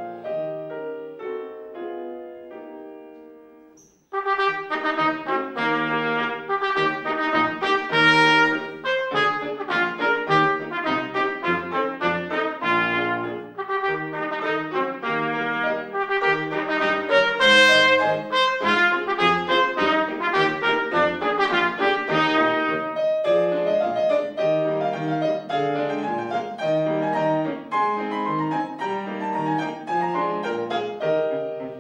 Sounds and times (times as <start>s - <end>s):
Trumpet: 4.1s - 31.8s.